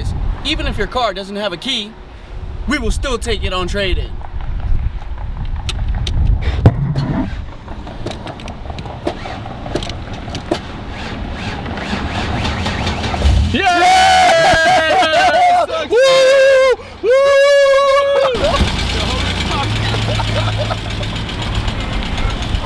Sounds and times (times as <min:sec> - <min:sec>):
Car: 0:03.8 - 0:16.4, 0:18.1 - 0:22.6.